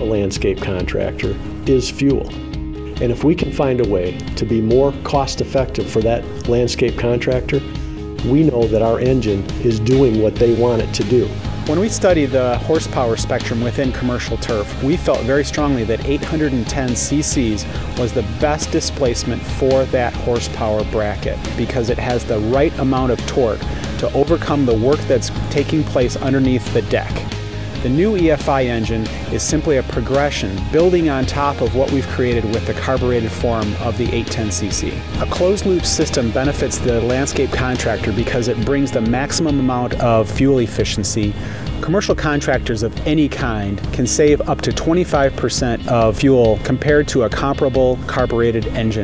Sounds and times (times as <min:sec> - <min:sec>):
Speech: 0:00.0 - 0:02.4, 0:03.0 - 0:49.0
Music: 0:00.0 - 0:49.0.